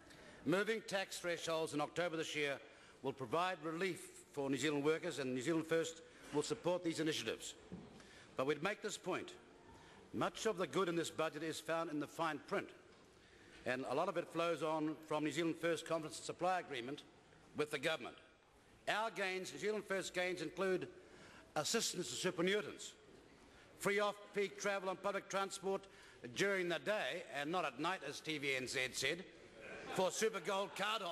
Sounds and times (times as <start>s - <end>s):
Narration, monologue: 0.0s - 31.1s
Male speech, man speaking: 0.4s - 7.6s, 8.4s - 9.4s, 10.2s - 12.8s, 13.7s - 18.3s, 18.9s - 20.9s, 21.6s - 23.0s, 23.8s - 29.3s, 29.9s - 31.1s.